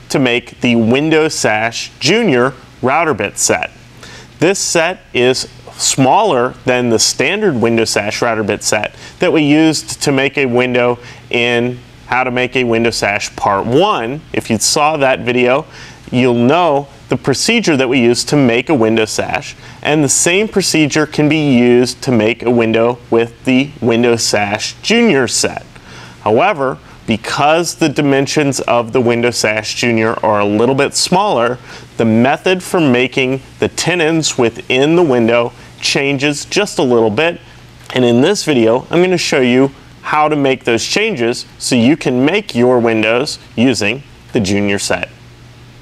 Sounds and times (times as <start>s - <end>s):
Speech: 0.0s - 3.8s, 4.4s - 45.2s.